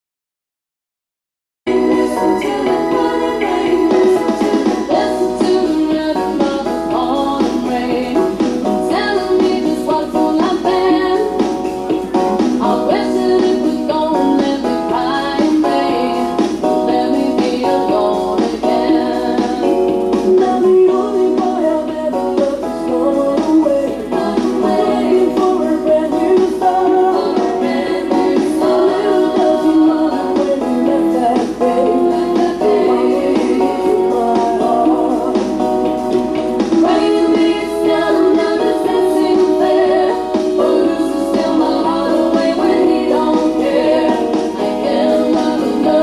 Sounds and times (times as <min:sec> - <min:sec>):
Music: 0:01.7 - 0:46.0.